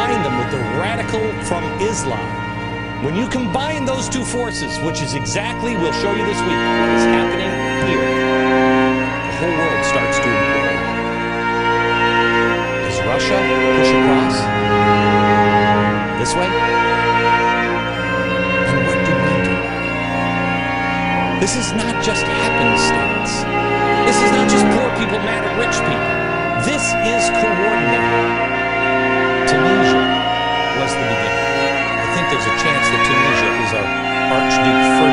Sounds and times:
Orchestra: 0.0s - 35.1s.

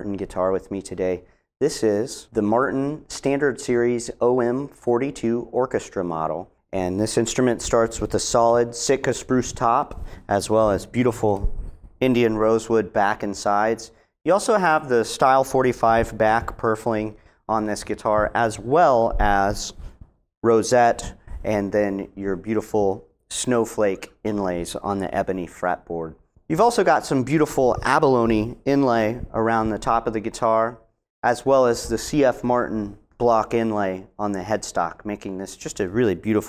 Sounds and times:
Speech: 0.0s - 19.8s, 20.4s - 36.4s.

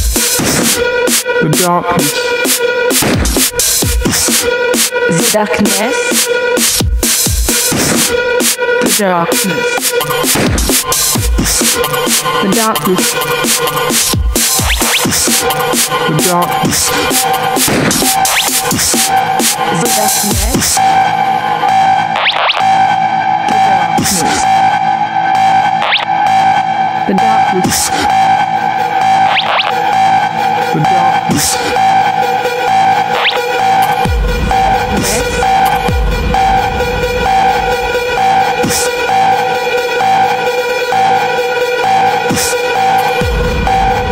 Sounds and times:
Music: 0.0s - 44.1s
Speech: 1.4s - 2.2s, 5.1s - 6.1s, 8.8s - 9.7s, 12.4s - 13.1s, 16.1s - 16.6s, 19.7s - 20.6s, 24.0s - 24.4s, 27.1s - 27.9s, 30.7s - 31.6s, 34.9s - 35.4s.

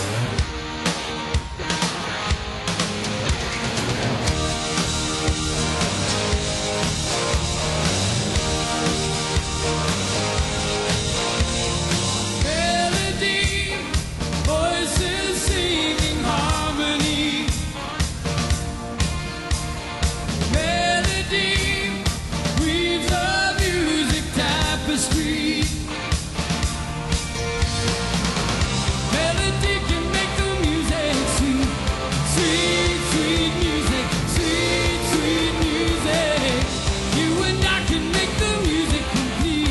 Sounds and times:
Exciting music: 0.0s - 39.7s.

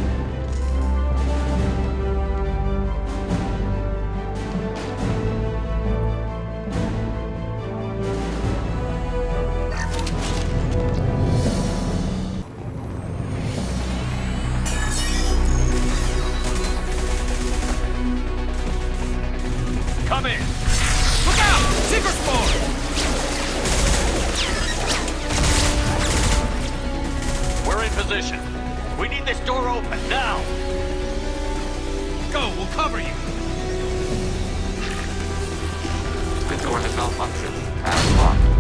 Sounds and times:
Music: 0.0s - 38.6s.

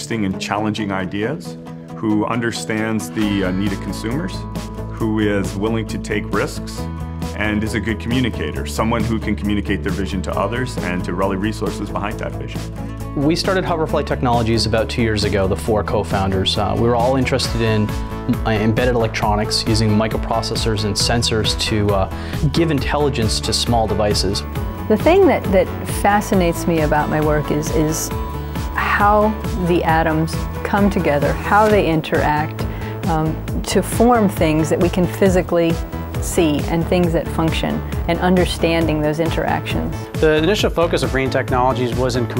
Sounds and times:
Speech: 0.0s - 4.4s, 7.4s - 12.6s, 13.2s - 27.9s, 40.2s - 42.3s
Music: 0.0s - 42.3s.

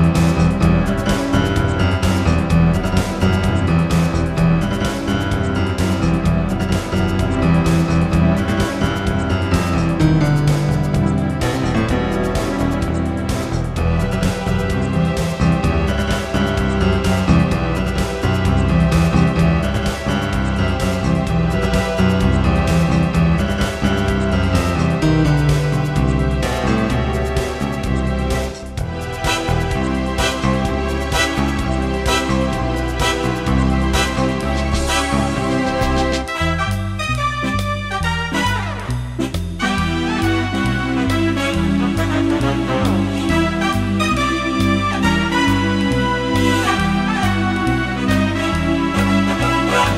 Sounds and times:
Electric piano: 0.0s - 49.9s.

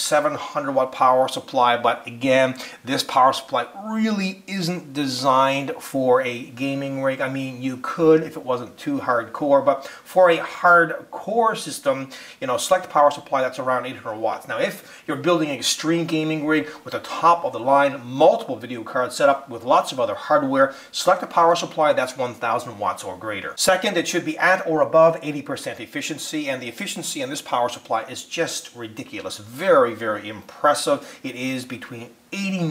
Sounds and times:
Speech: 0.0s - 32.7s.

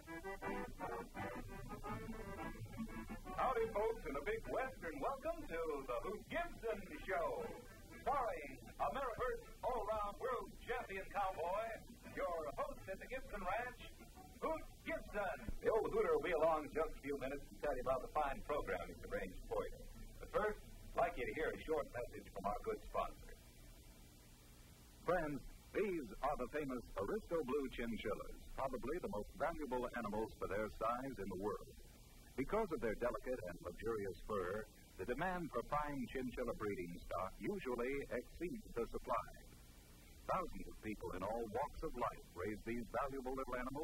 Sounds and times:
Speech: 3.4s - 23.4s, 25.0s - 31.8s, 32.4s - 39.5s, 40.3s - 43.8s.

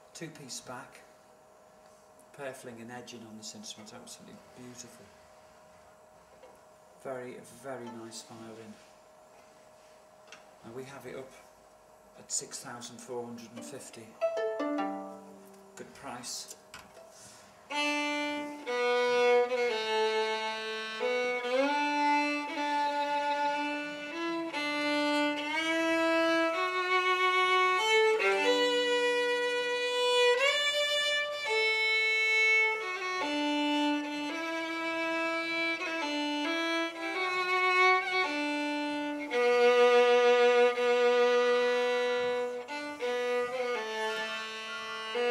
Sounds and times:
Speech: 0.1s - 1.1s, 2.3s - 5.2s, 7.0s - 8.8s, 10.6s - 11.5s, 12.2s - 14.2s, 15.8s - 16.6s
Violin, fiddle: 17.7s - 45.3s.

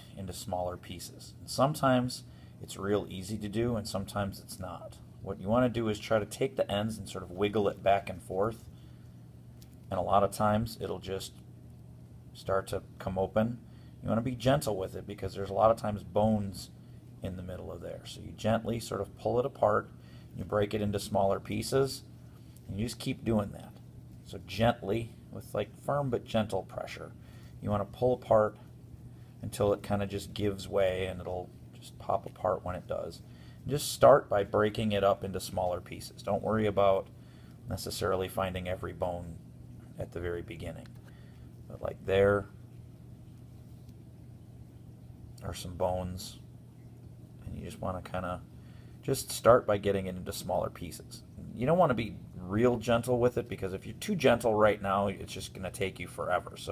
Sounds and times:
Speech: 0.0s - 8.7s, 9.9s - 11.4s, 12.4s - 22.1s, 22.7s - 28.7s, 29.4s - 37.1s, 37.7s - 41.0s, 41.7s - 42.6s, 45.4s - 46.5s, 47.4s - 56.7s.

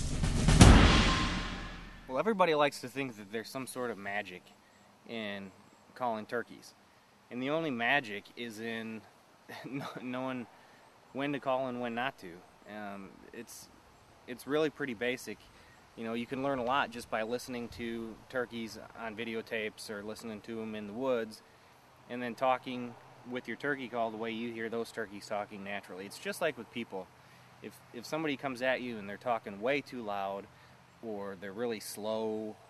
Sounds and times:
Speech: 2.1s - 4.5s, 5.1s - 10.5s, 11.2s - 13.7s, 14.3s - 15.4s, 16.0s - 21.4s, 22.1s - 32.6s.

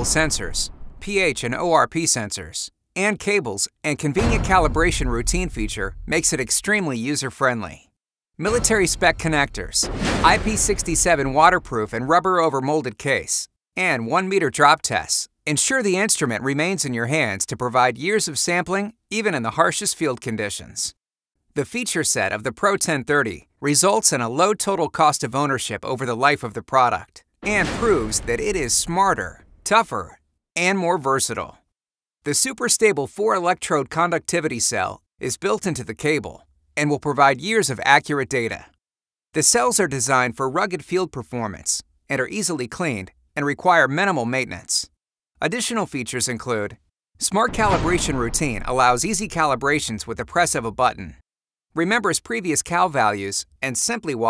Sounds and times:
Speech: 0.0s - 21.0s, 21.6s - 31.6s, 32.2s - 38.8s, 39.4s - 51.2s, 51.8s - 54.2s.

